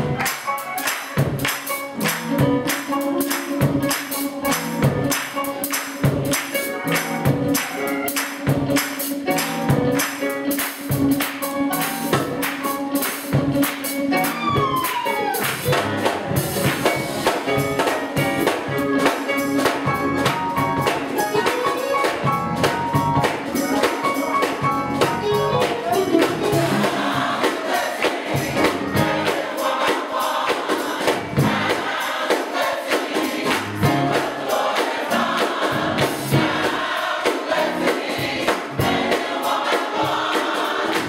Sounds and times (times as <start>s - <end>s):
Music: 0.0s - 41.0s.